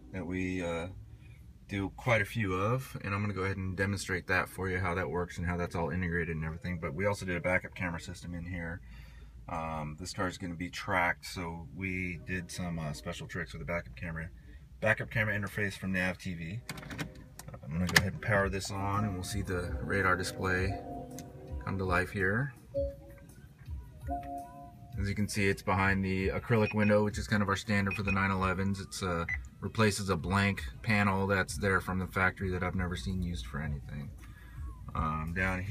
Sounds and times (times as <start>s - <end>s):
Speech: 0.1s - 0.9s, 1.7s - 8.8s, 9.5s - 16.6s, 17.5s - 20.8s, 25.0s - 34.1s, 34.9s - 35.7s
Music: 18.1s - 35.7s.